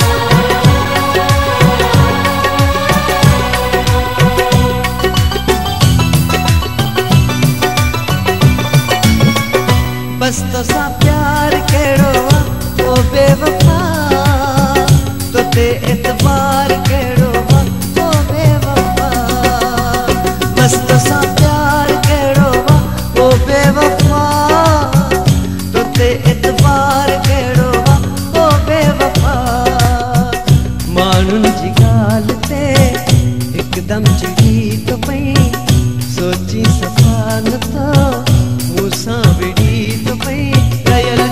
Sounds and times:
Music: 0.0s - 41.3s.

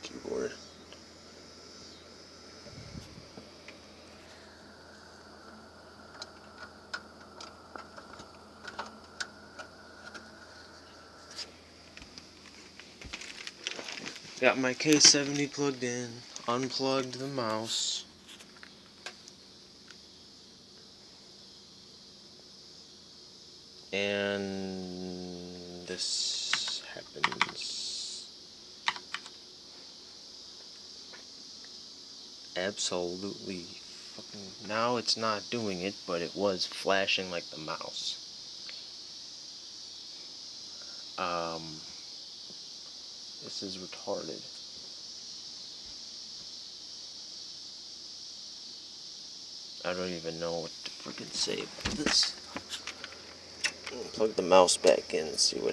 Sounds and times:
Speech: 0.0s - 0.6s, 14.4s - 18.1s, 24.0s - 28.3s, 32.6s - 38.2s, 41.2s - 41.9s, 43.4s - 44.5s, 49.8s - 52.6s, 53.9s - 55.7s
Computer keyboard: 27.2s - 27.5s, 28.9s - 29.3s.

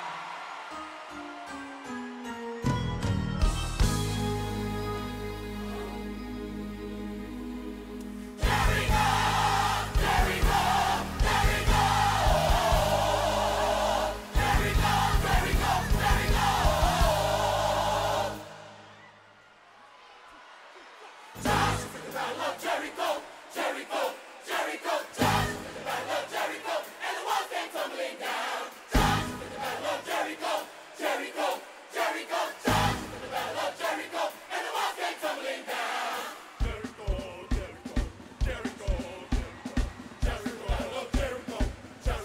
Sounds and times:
Music: 0.1s - 19.0s, 21.4s - 42.2s.

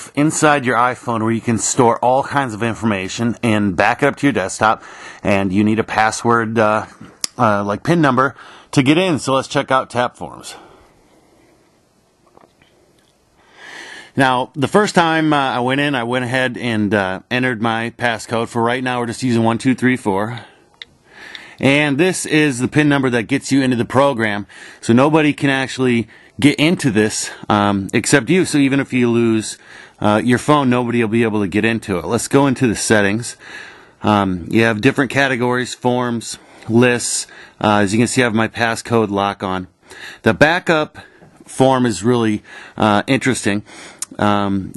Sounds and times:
Speech: 0.0s - 10.8s, 14.2s - 20.6s, 21.6s - 33.4s, 34.0s - 44.7s.

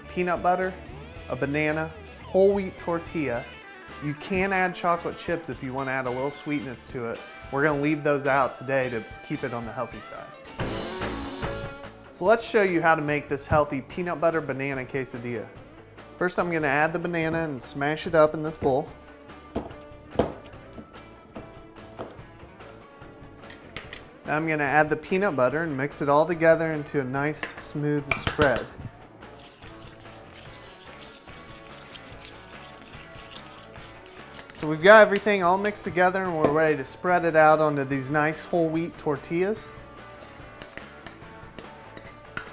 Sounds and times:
Speech: 0.0s - 10.4s, 12.2s - 15.5s, 16.2s - 18.9s, 24.3s - 28.8s, 34.6s - 39.7s
Music: 0.0s - 42.5s.

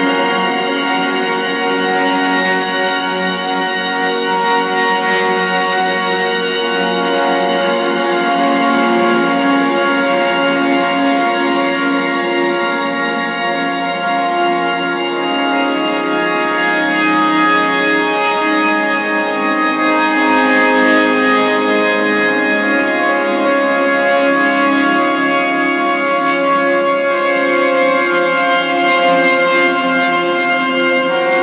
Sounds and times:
Music: 0.0s - 31.4s.

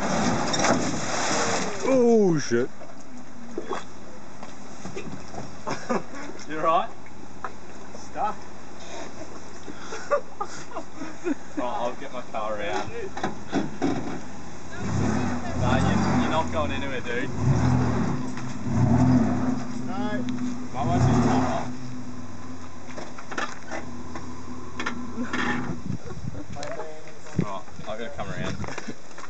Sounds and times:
Car: 0.0s - 10.2s, 11.4s - 29.2s
Speech: 15.2s - 17.3s.

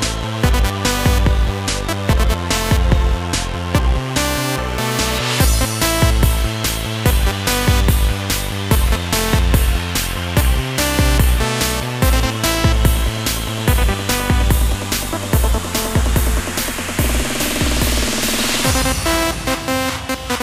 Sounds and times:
Techno: 0.0s - 20.4s.

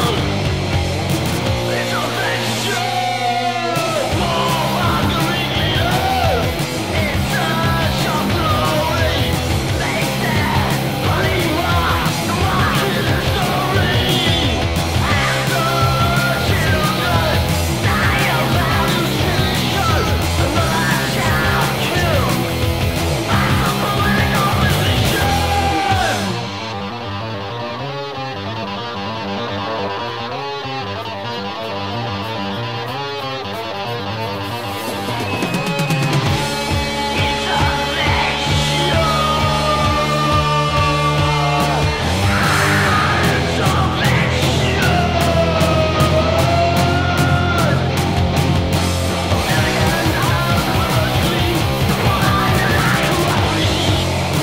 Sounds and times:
Rock music: 0.0s - 54.4s.

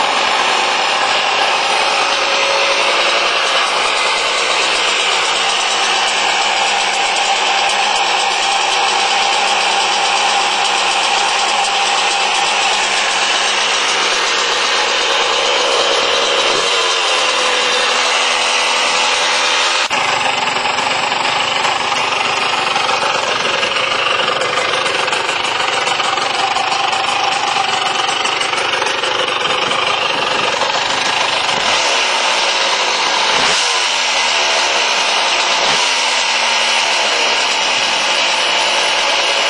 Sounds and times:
Engine knocking: 0.0s - 39.4s.

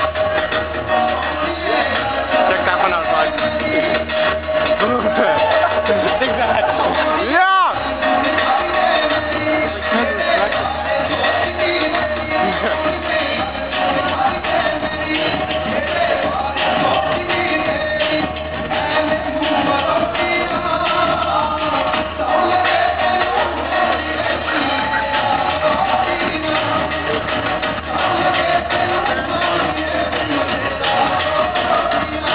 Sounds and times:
Inside, large room or hall: 0.0s - 32.3s
Music: 0.0s - 32.3s.

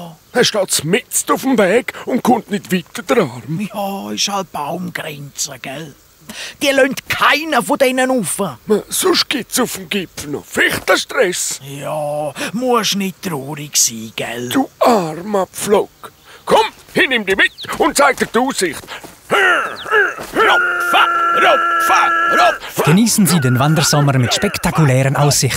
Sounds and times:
Speech: 0.0s - 6.0s, 6.6s - 18.8s, 20.4s - 25.5s
Animal: 19.3s - 25.5s.

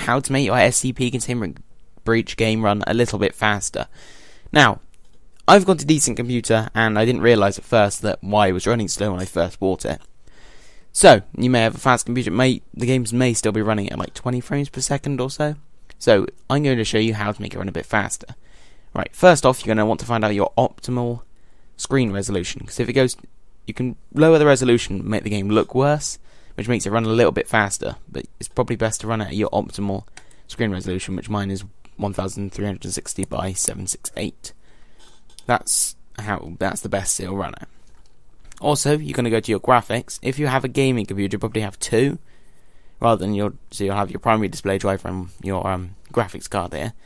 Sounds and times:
Speech: 0.0s - 3.9s, 4.5s - 4.8s, 5.4s - 10.1s, 11.0s - 34.6s, 35.4s - 37.7s, 38.5s - 42.2s, 43.0s - 47.0s.

